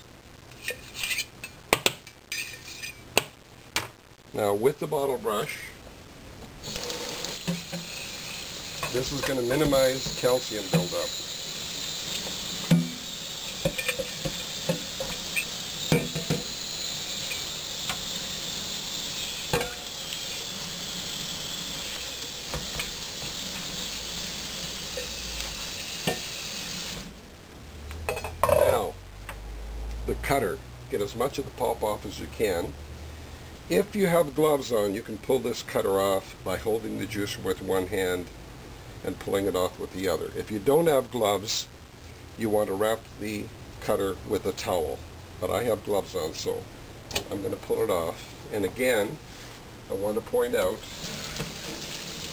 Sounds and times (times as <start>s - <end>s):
Sink (filling or washing): 6.6s - 27.1s, 50.7s - 52.3s
Water tap, faucet: 6.6s - 27.1s, 50.8s - 52.3s.